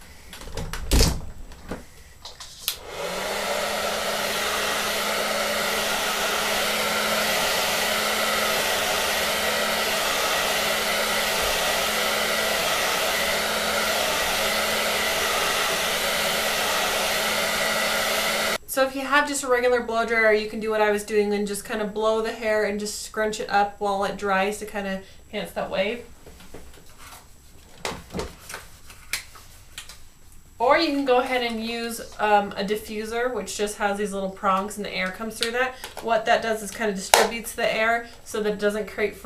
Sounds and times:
Hair dryer: 0:02.7 - 0:18.6, 0:35.4 - 0:39.2.

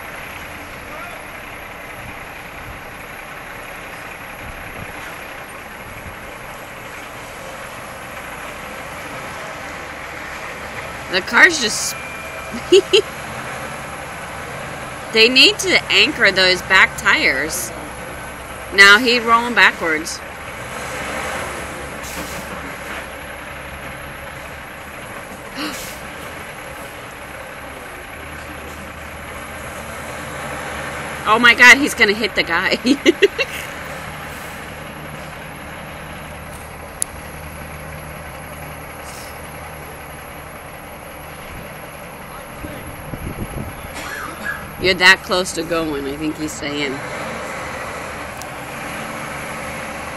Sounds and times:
Car: 0:00.0 - 0:50.1
Speech: 0:11.1 - 0:12.0, 0:15.2 - 0:17.9, 0:18.8 - 0:20.2, 0:31.3 - 0:33.0, 0:44.8 - 0:47.0.

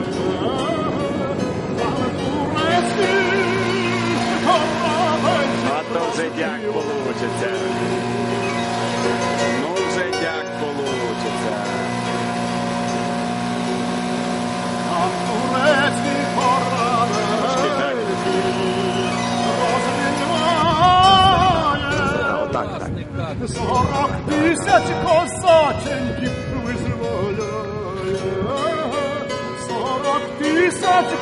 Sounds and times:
Motorboat, speedboat: 0:00.0 - 0:31.2.

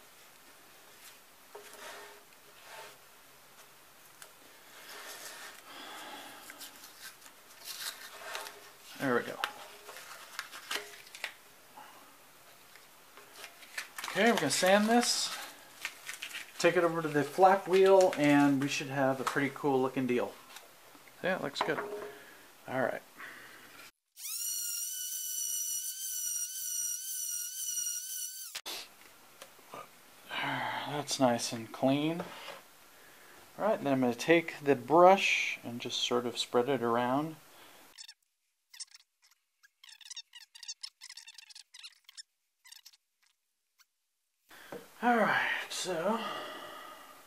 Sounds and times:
Speech: 0:09.0 - 0:09.5, 0:14.1 - 0:15.4, 0:16.6 - 0:20.4, 0:21.2 - 0:21.9, 0:22.7 - 0:23.1, 0:30.4 - 0:32.3, 0:33.6 - 0:37.4, 0:45.0 - 0:46.3.

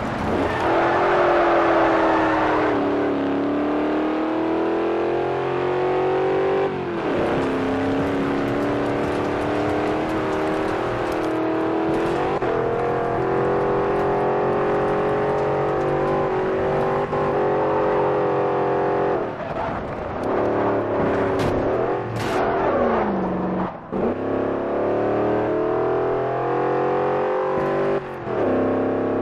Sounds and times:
Car: 0:00.0 - 0:29.2.

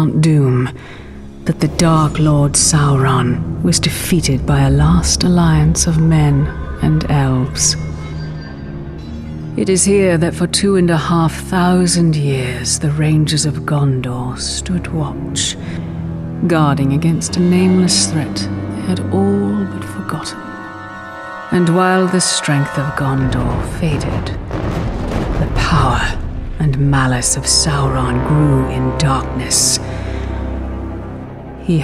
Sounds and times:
Speech: 0:00.0 - 0:00.8, 0:01.4 - 0:07.8, 0:09.6 - 0:15.6, 0:16.4 - 0:20.5, 0:21.6 - 0:24.4, 0:25.4 - 0:29.8
Music: 0:00.0 - 0:31.8.

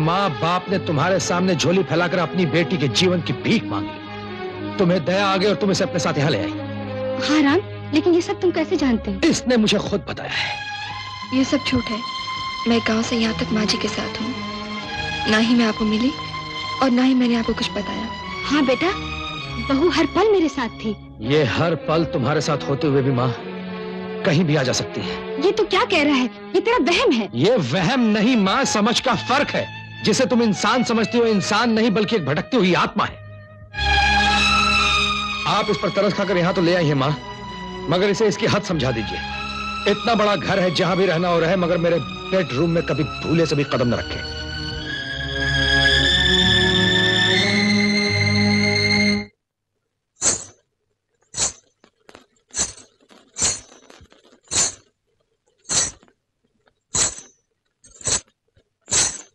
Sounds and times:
Music: 0:00.0 - 0:49.4.

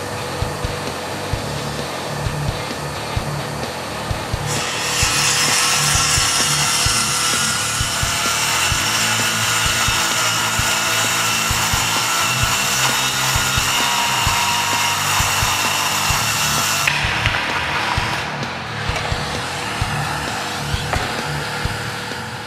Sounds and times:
Sawing: 0:04.4 - 0:22.4
Wood: 0:04.4 - 0:22.4.

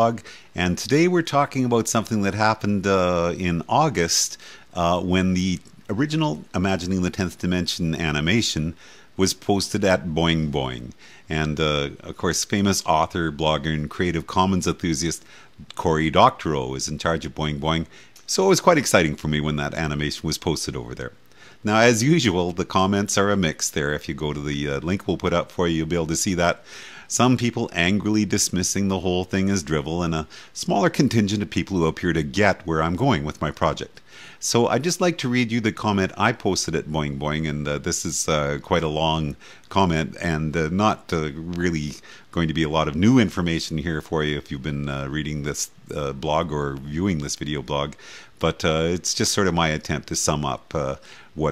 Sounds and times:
Speech: 0:00.0 - 0:51.5.

